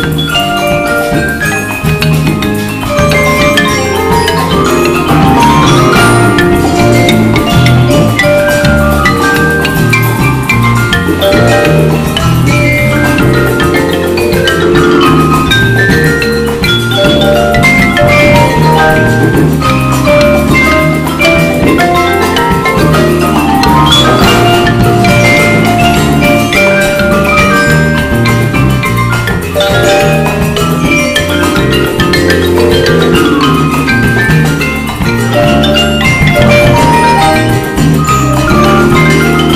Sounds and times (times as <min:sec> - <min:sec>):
Steelpan: 0:00.0 - 0:39.5.